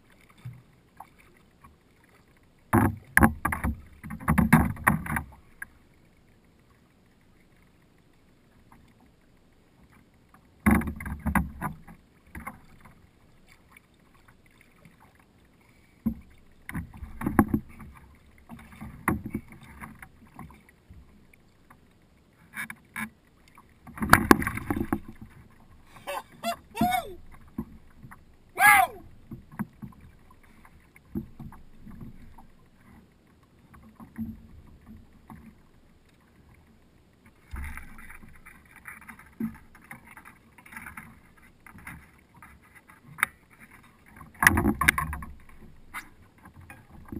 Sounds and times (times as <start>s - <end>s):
Rowboat, canoe, kayak: 0.0s - 47.1s.